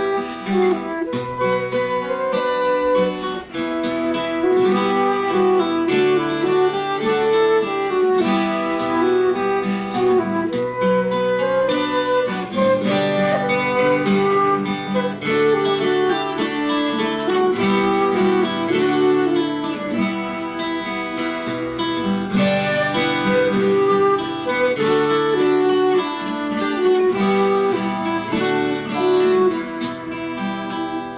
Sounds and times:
Electric guitar: 0:00.0 - 0:31.1
Strum: 0:00.0 - 0:31.1.

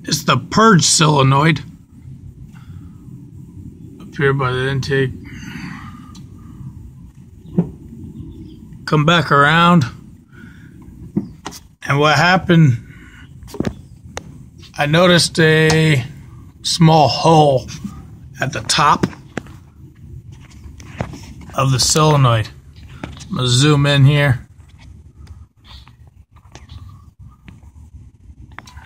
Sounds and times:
Speech: 0:00.0 - 0:01.7, 0:04.1 - 0:05.2, 0:08.9 - 0:10.0, 0:11.8 - 0:12.8, 0:14.8 - 0:17.8, 0:18.4 - 0:19.2, 0:21.5 - 0:22.6, 0:23.3 - 0:24.5.

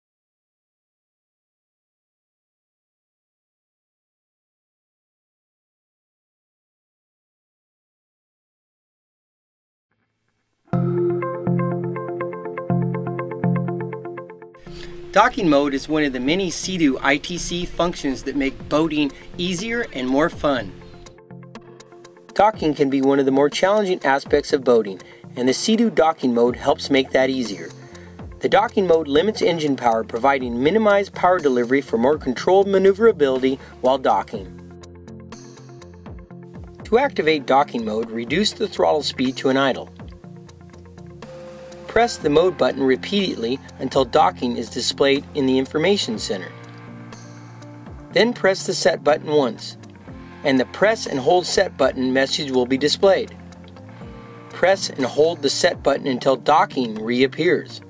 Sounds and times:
Music: 0:10.0 - 0:57.9
Speech: 0:15.1 - 0:20.8, 0:22.4 - 0:27.8, 0:28.4 - 0:34.5, 0:36.8 - 0:39.9, 0:41.9 - 0:46.6, 0:48.2 - 0:49.8, 0:50.4 - 0:53.4, 0:54.6 - 0:57.9.

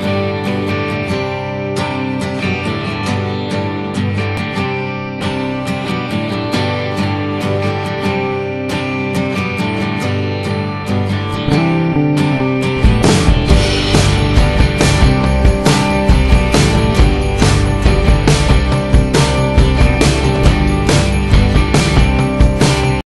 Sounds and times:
Music: 0:00.0 - 0:23.0.

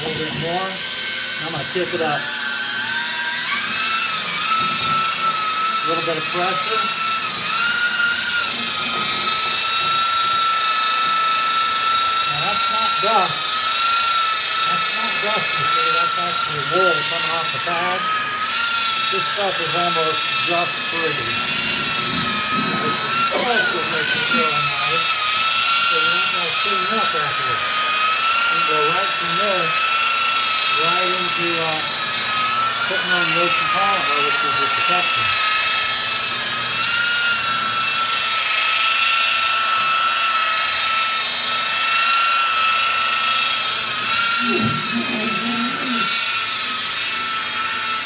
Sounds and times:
Speech: 0:00.0 - 0:00.8, 0:01.4 - 0:02.3, 0:05.8 - 0:07.0, 0:12.3 - 0:13.4, 0:14.7 - 0:18.1, 0:19.1 - 0:21.3, 0:22.8 - 0:25.1, 0:25.9 - 0:27.6, 0:28.5 - 0:29.8, 0:30.7 - 0:31.9, 0:32.9 - 0:35.4.

